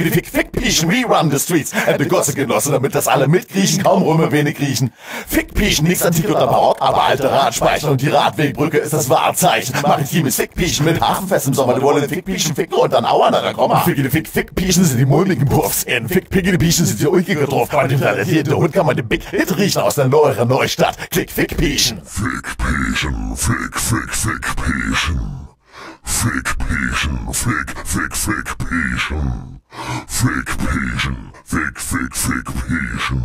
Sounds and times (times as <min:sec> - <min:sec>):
A capella: 0:00.0 - 0:33.2.